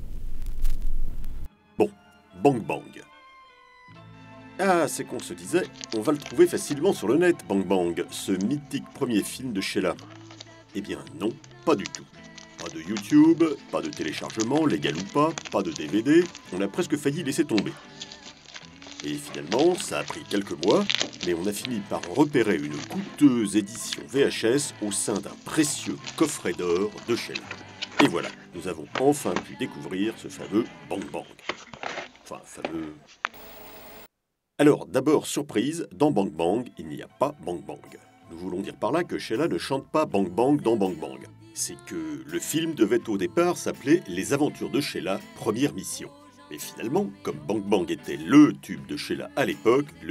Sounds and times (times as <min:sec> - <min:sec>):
Music: 0:01.5 - 0:33.1, 0:35.1 - 0:50.1
Speech: 0:01.8 - 0:03.1, 0:04.6 - 0:10.0, 0:10.7 - 0:17.8, 0:19.0 - 0:27.4, 0:28.0 - 0:31.4, 0:32.3 - 0:33.0, 0:34.6 - 0:50.1.